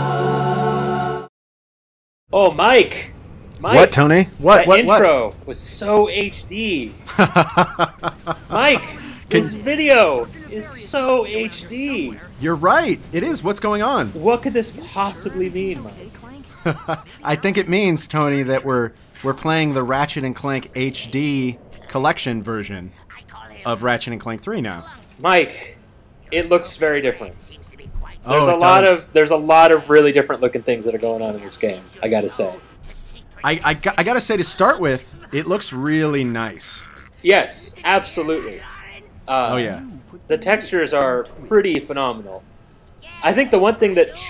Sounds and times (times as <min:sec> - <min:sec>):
Speech: 0:08.7 - 0:16.2, 0:27.5 - 0:38.6.